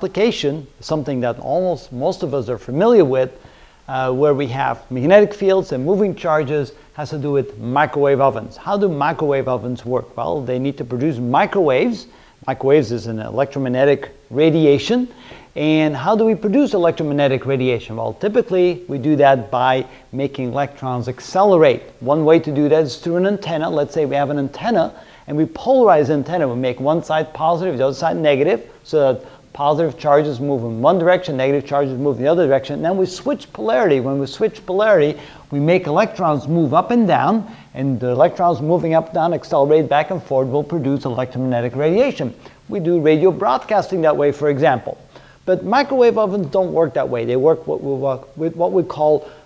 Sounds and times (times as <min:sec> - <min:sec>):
Speech: 0:00.0 - 0:49.3.